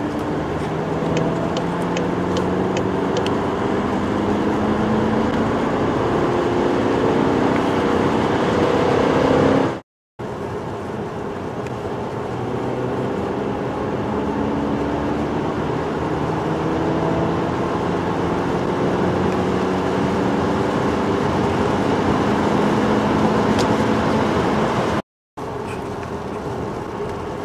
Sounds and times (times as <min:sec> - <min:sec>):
Car: 0:00.0 - 0:27.4.